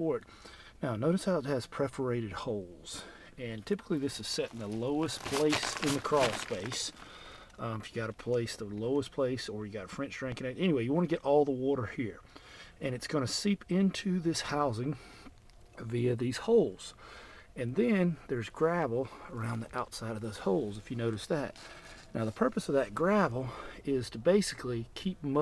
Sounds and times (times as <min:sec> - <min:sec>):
Speech: 0:00.0 - 0:00.2, 0:00.8 - 0:07.0, 0:07.6 - 0:12.2, 0:12.8 - 0:15.0, 0:15.8 - 0:17.0, 0:17.6 - 0:25.4.